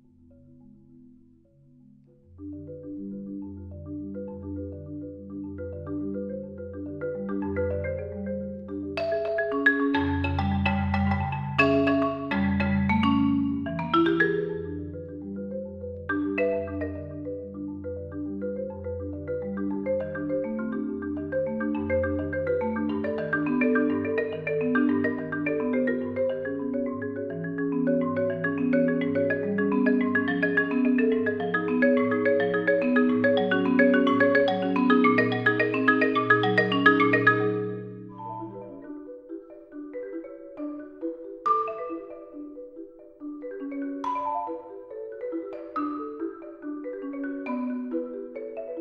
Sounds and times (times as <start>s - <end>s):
Glockenspiel: 0.0s - 48.8s
Marimba, xylophone: 0.0s - 48.8s.